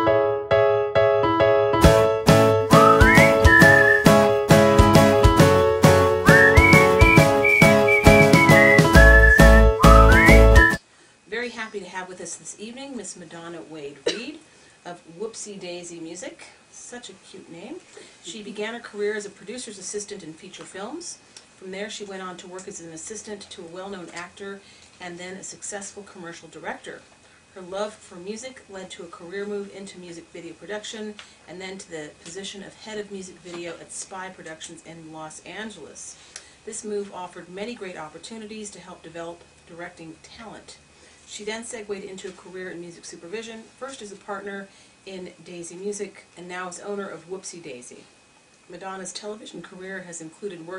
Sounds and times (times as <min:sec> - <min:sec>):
Speech: 0:11.3 - 0:48.1, 0:48.7 - 0:50.7.